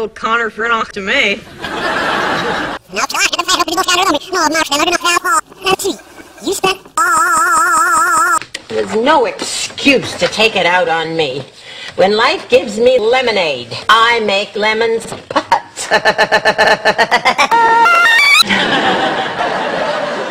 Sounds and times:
Speech: 0.0 - 1.4, 2.9 - 6.8, 8.7 - 15.2.

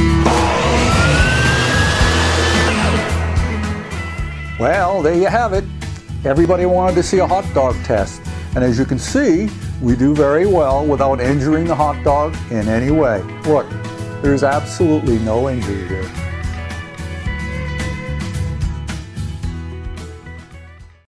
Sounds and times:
Music: 0.0 - 21.1
Speech: 4.6 - 16.2.

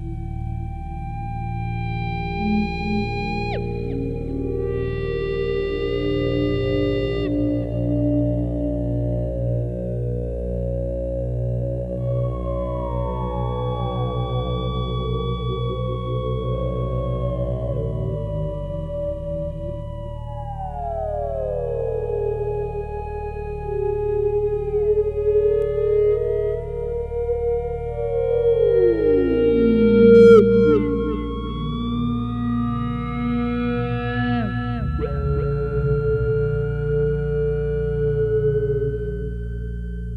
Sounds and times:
Ambient music: 0.0 - 40.1
Theremin: 0.0 - 40.1.

